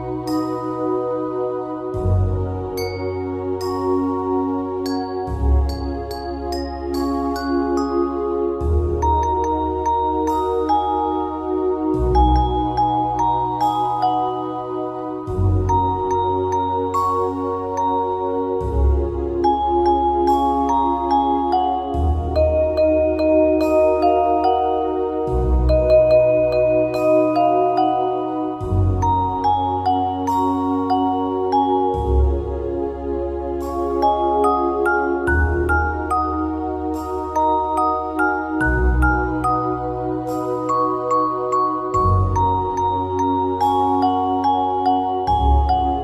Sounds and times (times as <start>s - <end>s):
Glockenspiel: 0.0s - 46.0s
Marimba, xylophone: 2.8s - 14.7s, 15.3s - 18.8s, 19.4s - 32.5s, 33.6s - 46.0s.